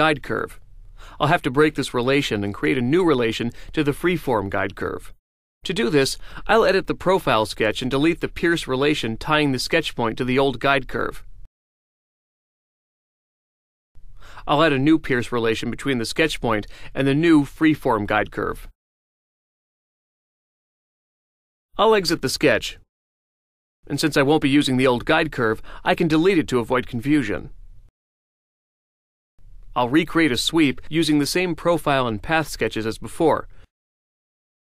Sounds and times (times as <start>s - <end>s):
Speech: 0.0s - 0.6s, 1.2s - 11.3s, 14.4s - 18.7s, 21.8s - 22.8s, 23.9s - 27.5s, 29.8s - 33.5s.